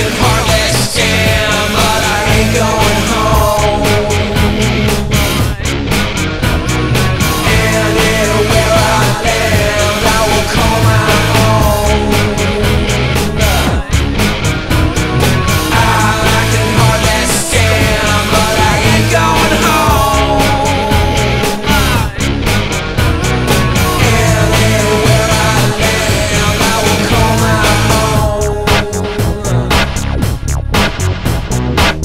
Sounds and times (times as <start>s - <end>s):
Drum machine: 0.0s - 32.0s.